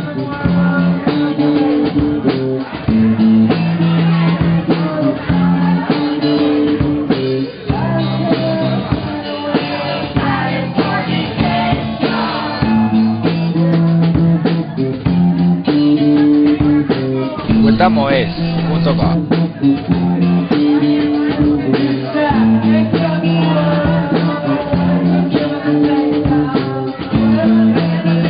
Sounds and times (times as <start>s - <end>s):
Crowd: 0.0s - 28.2s
Hubbub, speech noise, speech babble: 0.0s - 28.2s
Music: 0.0s - 28.2s
Speech: 15.8s - 22.6s.